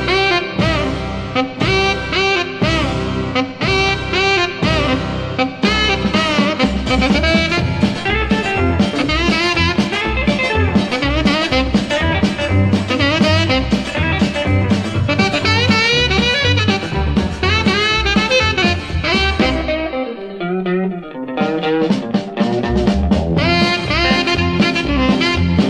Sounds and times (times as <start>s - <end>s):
Brass instrument: 0.0s - 20.2s, 21.4s - 25.7s
Saxophone: 0.0s - 20.5s, 21.3s - 25.7s.